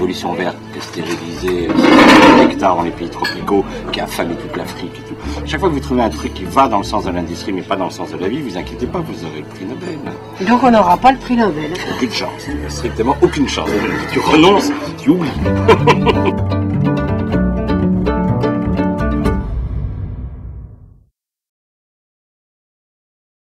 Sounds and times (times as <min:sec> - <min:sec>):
Music: 0:00.0 - 0:21.1.